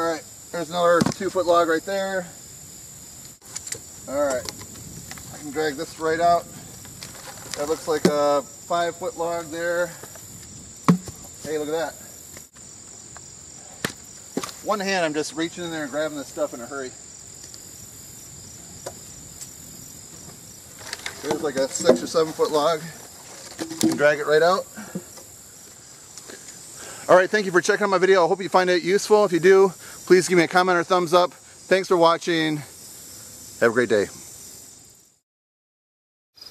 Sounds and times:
Speech: 0.0 - 2.3, 7.6 - 10.0, 11.4 - 12.0, 14.7 - 17.0, 21.2 - 23.0, 23.9 - 24.7, 27.1 - 32.7, 33.6 - 34.2
Outside, rural or natural: 0.0 - 35.2.

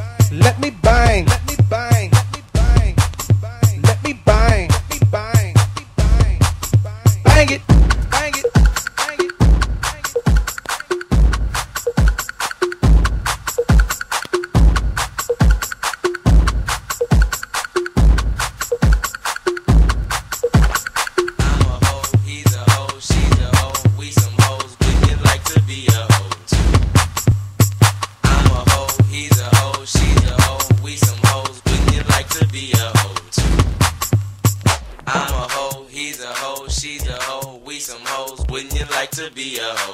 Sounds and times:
Music: 0.0 - 39.9.

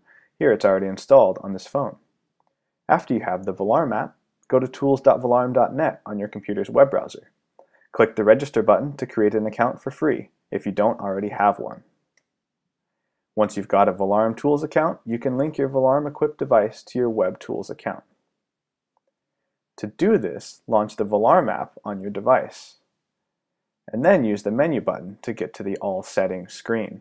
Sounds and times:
Speech: 0.0 - 2.0, 2.9 - 7.2, 8.0 - 11.8, 13.4 - 18.1, 19.8 - 22.8, 23.9 - 27.0.

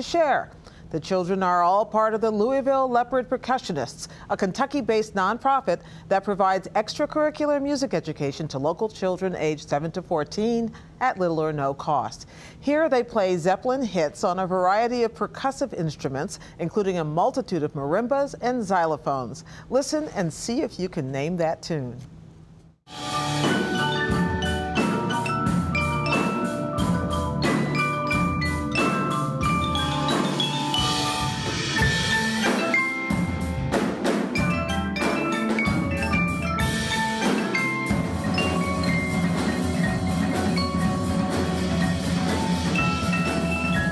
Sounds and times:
Speech: 0.0 - 22.1.

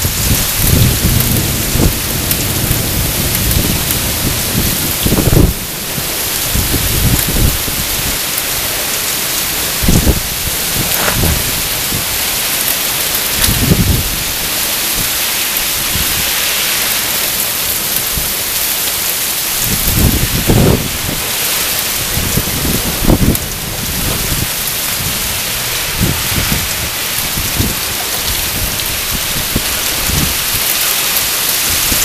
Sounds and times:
Rain on surface: 0.0 - 32.0.

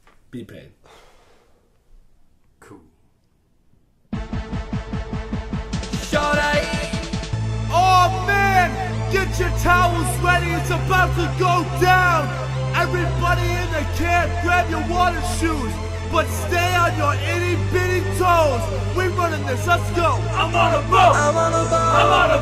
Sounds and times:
Music: 4.1 - 22.4.

